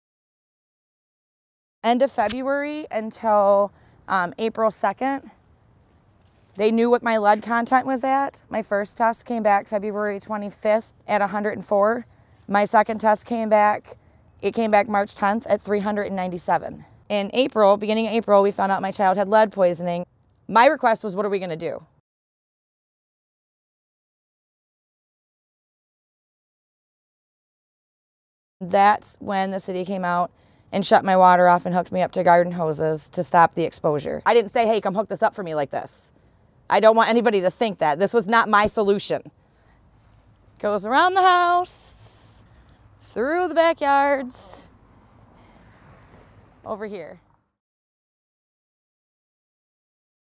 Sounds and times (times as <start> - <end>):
Speech: 1.9 - 5.4, 6.6 - 21.9, 28.6 - 36.1, 36.7 - 39.3, 40.6 - 42.4, 43.1 - 44.7, 46.7 - 47.2.